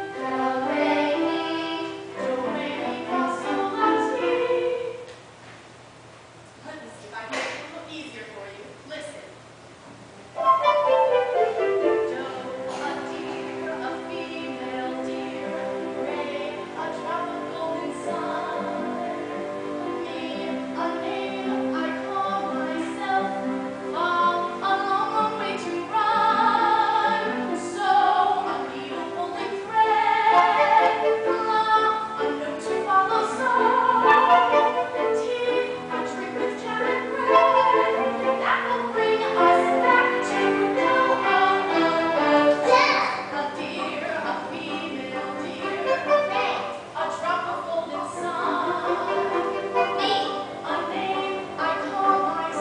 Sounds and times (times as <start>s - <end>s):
Music: 0.0s - 5.1s, 10.3s - 52.6s
Speech: 6.6s - 9.4s.